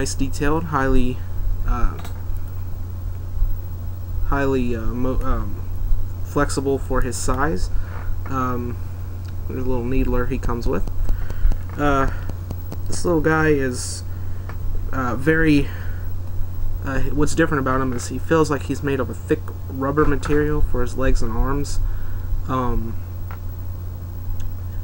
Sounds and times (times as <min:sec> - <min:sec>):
Speech: 0:00.0 - 0:02.2, 0:04.3 - 0:05.6, 0:06.3 - 0:07.7, 0:08.3 - 0:08.8, 0:09.5 - 0:10.9, 0:11.8 - 0:12.2, 0:12.9 - 0:14.1, 0:14.9 - 0:15.8, 0:16.8 - 0:21.8, 0:22.5 - 0:23.0.